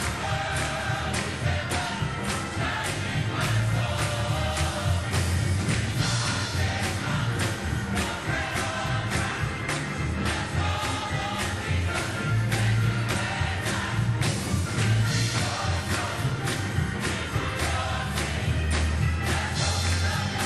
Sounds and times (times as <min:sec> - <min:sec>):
Choir: 0:00.0 - 0:20.4.